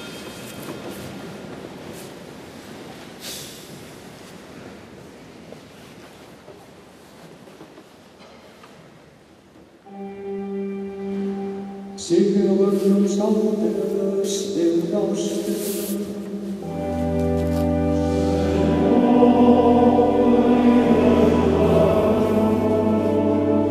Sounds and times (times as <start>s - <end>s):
Chant: 9.9s - 23.7s
Choir: 17.8s - 23.7s.